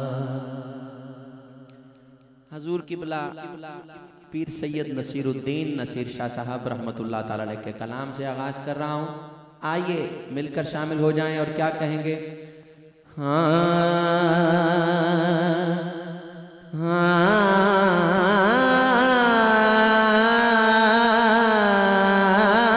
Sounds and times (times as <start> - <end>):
Speech: 2.5 - 3.7, 4.4 - 12.2.